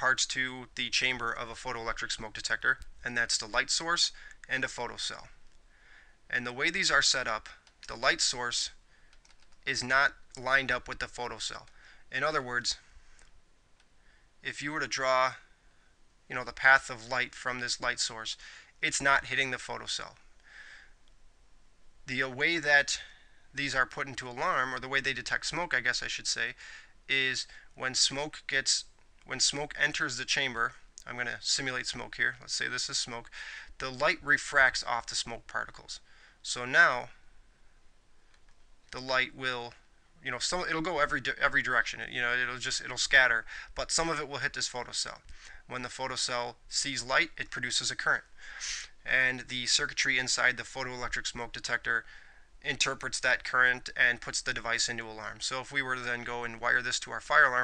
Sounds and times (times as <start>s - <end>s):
Speech: 0.0s - 5.4s, 6.3s - 8.8s, 9.6s - 12.9s, 14.4s - 15.5s, 16.3s - 20.2s, 22.1s - 37.2s, 38.9s - 57.6s.